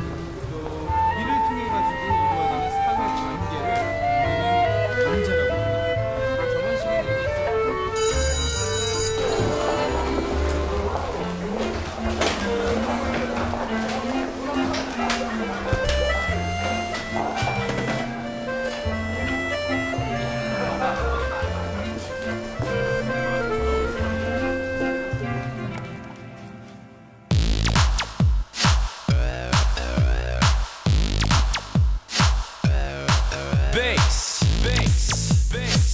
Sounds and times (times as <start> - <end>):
Music: 0.0 - 35.9
Laughter: 20.5 - 21.9.